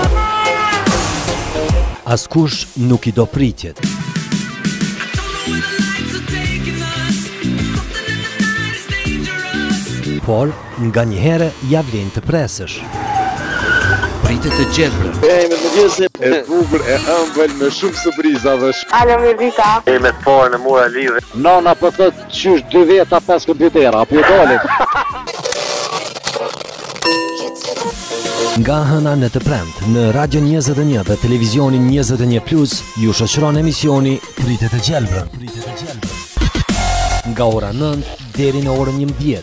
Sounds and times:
Music: 0:00.0 - 0:10.5, 0:14.2 - 0:25.4, 0:27.1 - 0:39.4
Speech: 0:37.3 - 0:39.4.

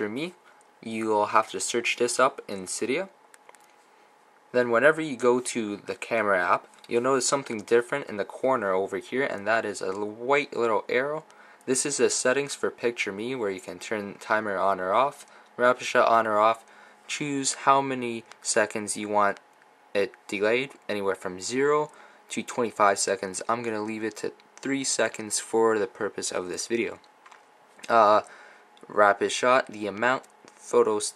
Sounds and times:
Speech: 0:00.0 - 0:03.2, 0:04.5 - 0:19.4, 0:20.0 - 0:27.1, 0:27.8 - 0:31.1.

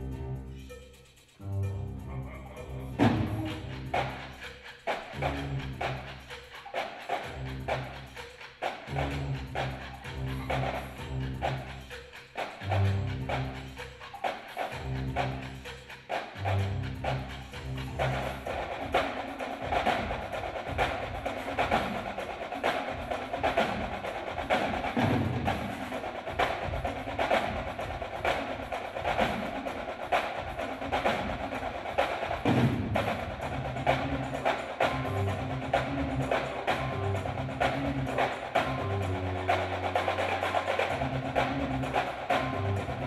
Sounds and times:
Percussion: 0:00.0 - 0:43.0.

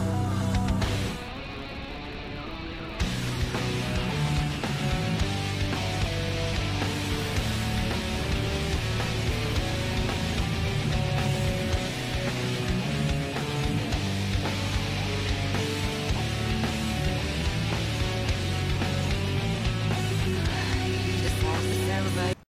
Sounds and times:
Music: 0:00.0 - 0:22.5
Speech: 0:20.3 - 0:22.5.

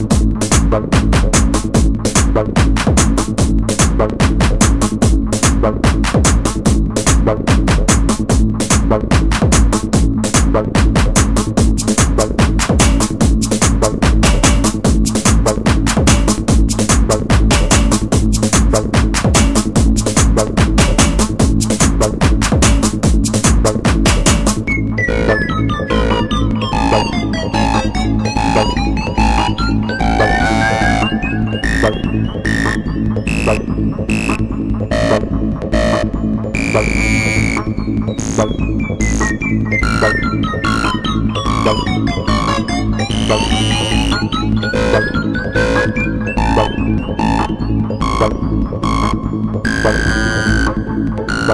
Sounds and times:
Techno: 0:00.0 - 0:51.5.

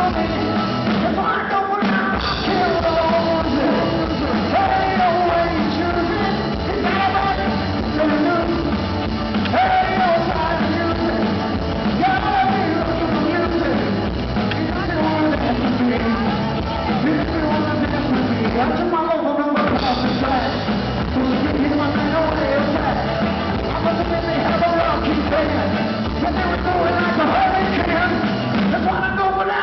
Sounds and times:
Rock and roll: 0:00.0 - 0:29.6.

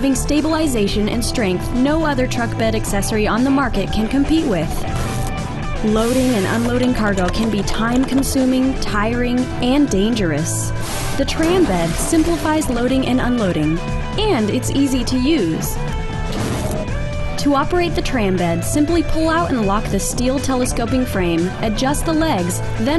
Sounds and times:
Speech: 0:00.0 - 0:04.8, 0:05.8 - 0:15.8, 0:17.4 - 0:22.9
Music: 0:00.0 - 0:22.9.

